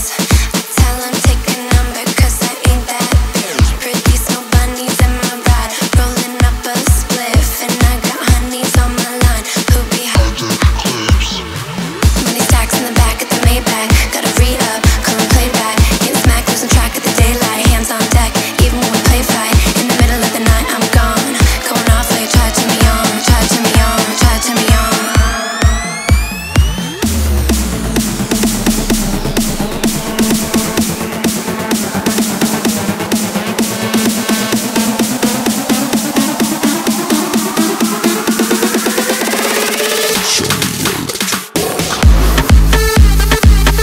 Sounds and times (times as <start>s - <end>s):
Music: 0.0s - 43.8s.